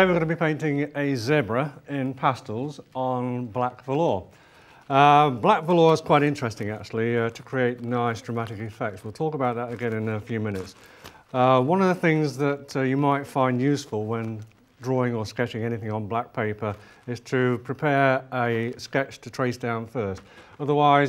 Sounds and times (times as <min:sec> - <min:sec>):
Speech: 0:00.0 - 0:04.3, 0:04.9 - 0:21.0.